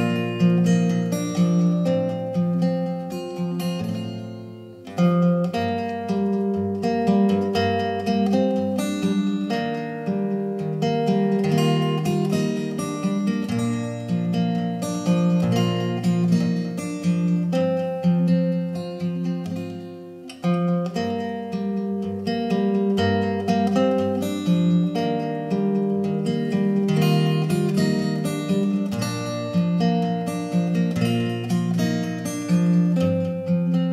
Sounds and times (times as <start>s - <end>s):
Guitar: 0.0s - 33.9s.